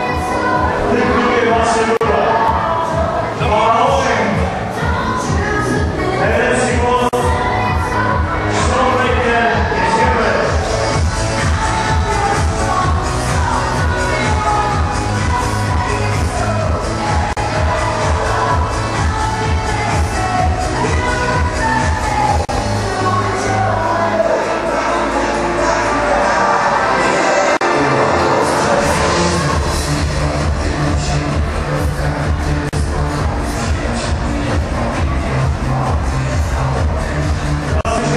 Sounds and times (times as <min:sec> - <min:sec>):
Music: 0:00.0 - 0:38.1
Speech: 0:00.8 - 0:02.6, 0:03.4 - 0:04.5, 0:06.2 - 0:07.3, 0:08.5 - 0:10.6, 0:37.8 - 0:38.1.